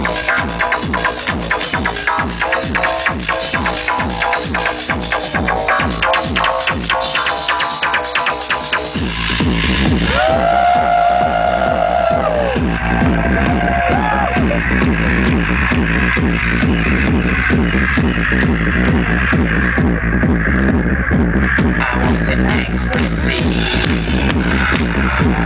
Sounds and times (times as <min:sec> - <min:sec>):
Music: 0:00.0 - 0:25.4.